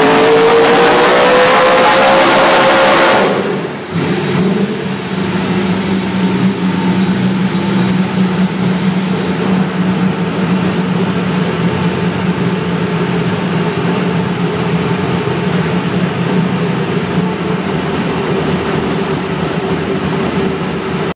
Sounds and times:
Vehicle: 0:00.0 - 0:21.1
Idling: 0:03.3 - 0:21.1.

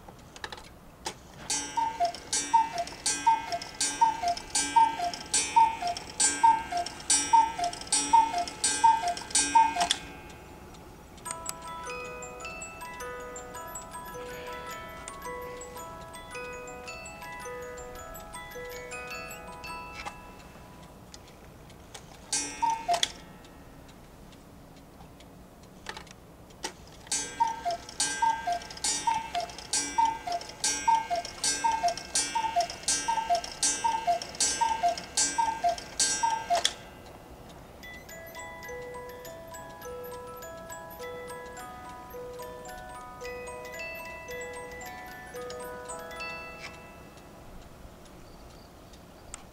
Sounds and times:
Tick-tock: 0:01.4 - 0:14.5, 0:17.2 - 0:49.5.

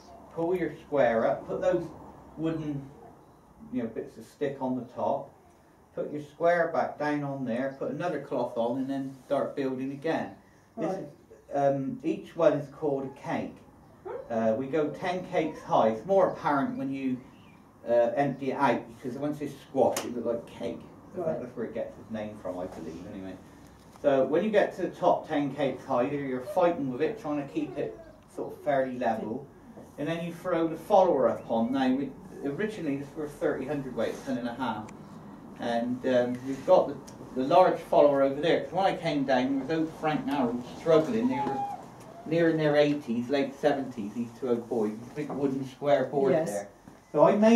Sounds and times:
Speech: 0:00.3 - 0:02.9, 0:03.6 - 0:05.3, 0:06.0 - 0:13.6, 0:14.3 - 0:17.2, 0:17.8 - 0:23.4, 0:24.0 - 0:34.9, 0:35.6 - 0:47.5.

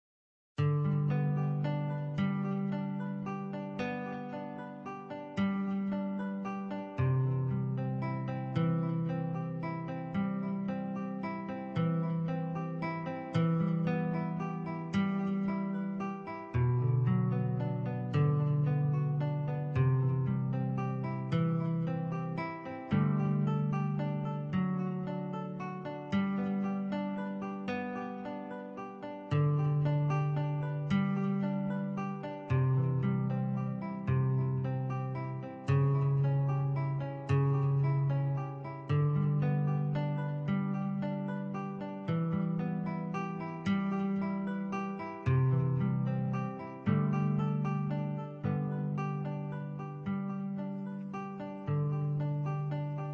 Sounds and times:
Music: 0:00.6 - 0:53.1.

